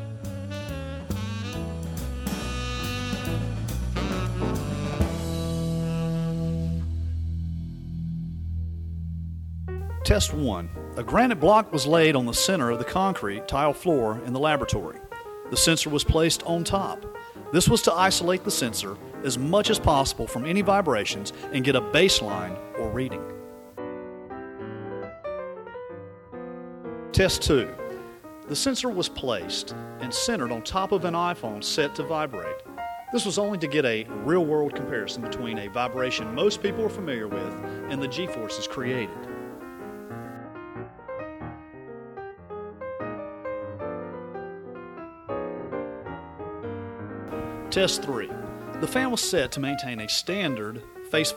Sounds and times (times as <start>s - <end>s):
Music: 0.0s - 51.3s
Speech: 10.0s - 23.3s, 27.2s - 27.8s, 28.5s - 32.6s, 33.2s - 39.3s, 47.7s - 51.3s.